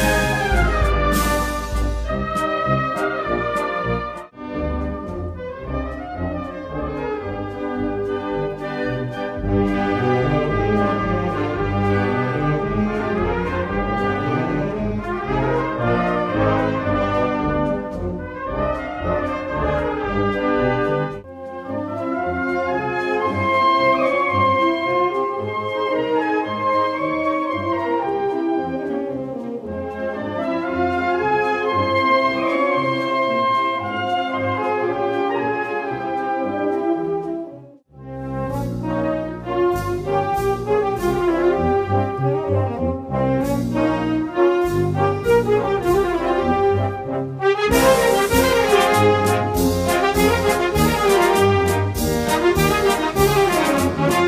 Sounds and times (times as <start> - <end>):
Brass instrument: 0.0 - 54.2.